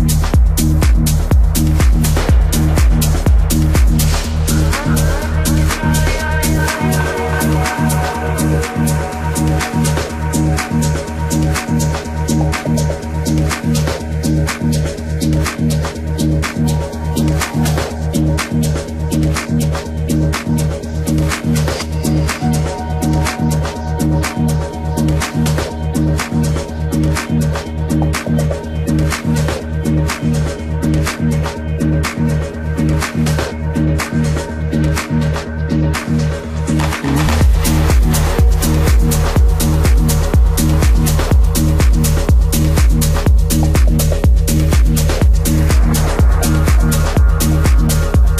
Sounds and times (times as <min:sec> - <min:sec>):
Electronica: 0:00.0 - 0:48.3.